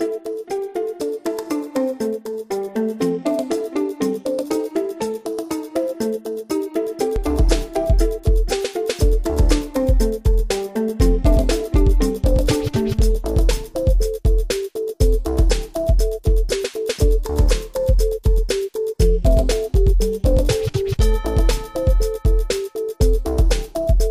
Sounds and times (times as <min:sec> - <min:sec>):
Music: 0:00.0 - 0:24.1.